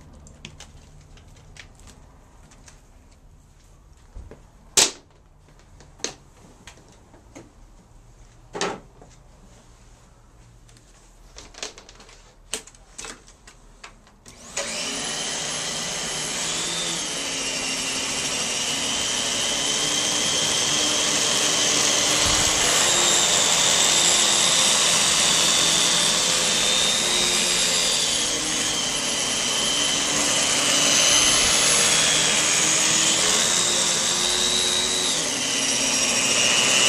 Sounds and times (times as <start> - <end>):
Vacuum cleaner: 14.3 - 36.8.